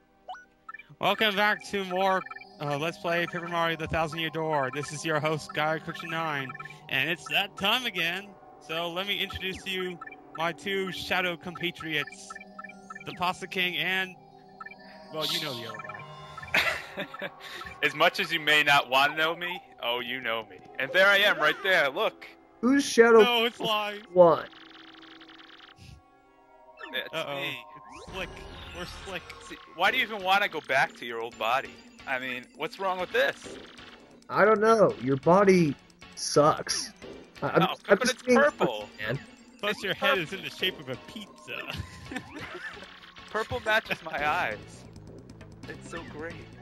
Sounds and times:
Music: 0.0s - 46.6s
Speech: 1.0s - 12.3s, 15.2s - 15.7s, 17.8s - 24.5s, 26.9s - 33.4s, 34.3s - 41.7s, 43.4s - 44.6s, 45.7s - 46.4s.

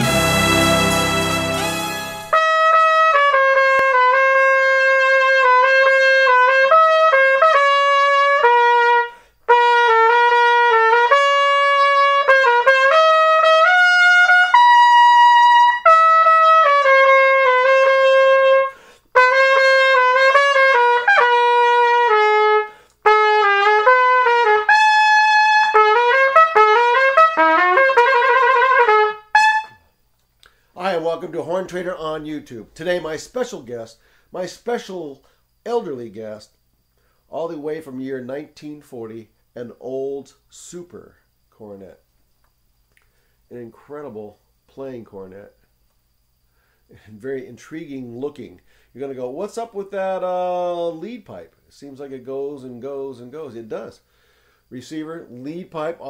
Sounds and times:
Trumpet: 0.0s - 29.9s.

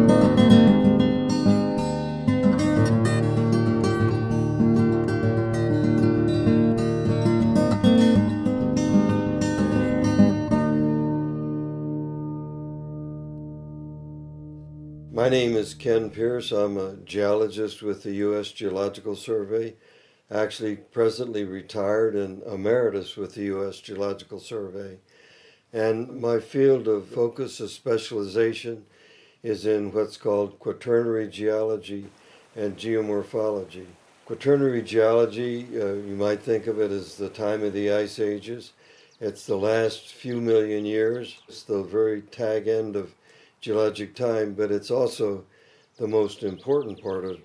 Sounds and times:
Music: 0.0s - 16.2s.

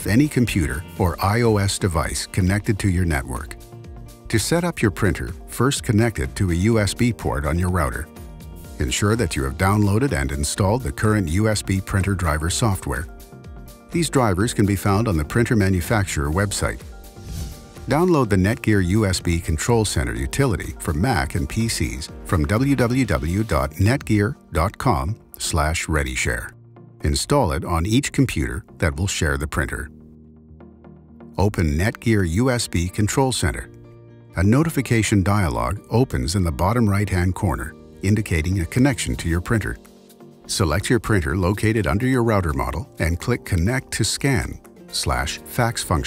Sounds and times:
Speech: 0.0s - 3.6s, 4.3s - 8.1s, 8.8s - 13.1s, 13.9s - 16.8s, 17.9s - 29.9s, 31.4s - 33.7s, 34.4s - 39.9s, 40.5s - 46.0s
Music: 0.0s - 46.0s.

